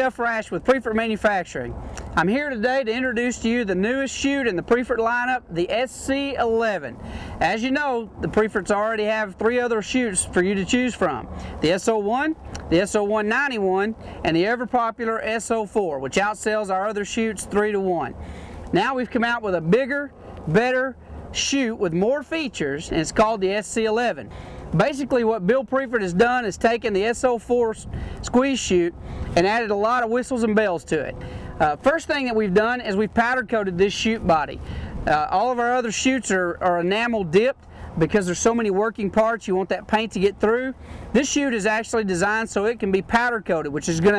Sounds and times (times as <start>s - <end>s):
Speech: 0.0s - 44.1s.